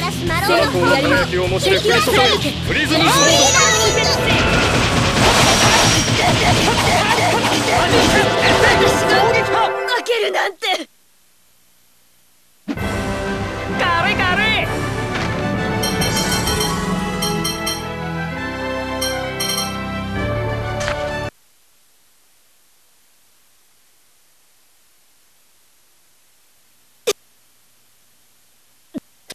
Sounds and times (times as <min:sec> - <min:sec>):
Speech: 0:00.0 - 0:04.4, 0:07.2 - 0:10.9, 0:13.8 - 0:14.7
Music: 0:00.0 - 0:10.1, 0:12.8 - 0:21.3.